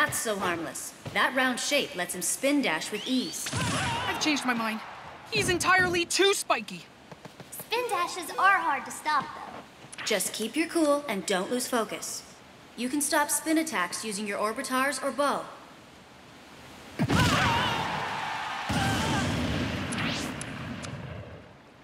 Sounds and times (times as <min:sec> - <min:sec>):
Speech: 0:00.0 - 0:06.9, 0:07.5 - 0:15.6.